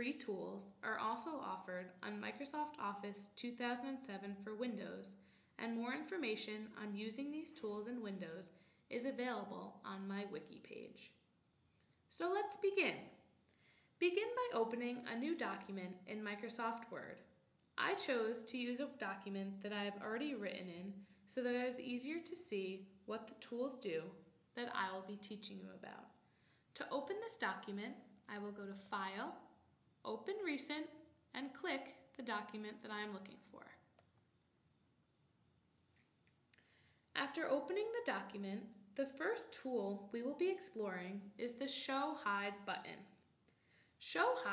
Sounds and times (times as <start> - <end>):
Speech: 0.0 - 11.2, 12.1 - 13.2, 14.0 - 26.1, 26.8 - 29.4, 30.0 - 33.9, 37.2 - 43.2, 44.0 - 44.5.